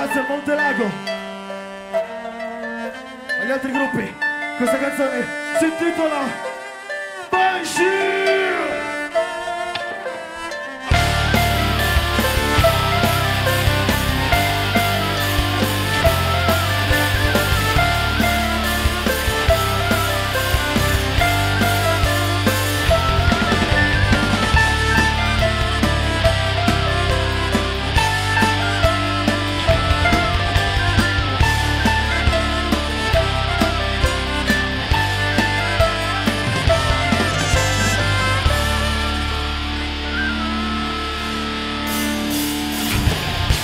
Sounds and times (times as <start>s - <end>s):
Music: 0.0s - 43.6s.